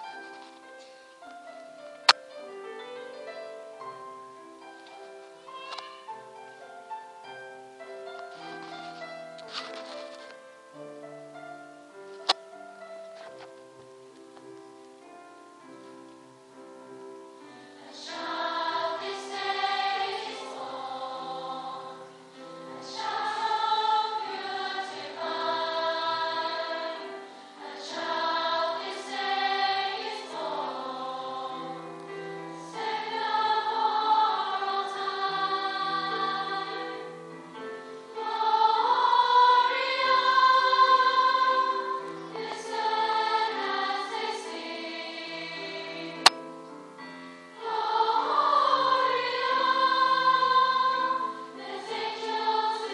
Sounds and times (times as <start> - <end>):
Choir: 15.0 - 52.9.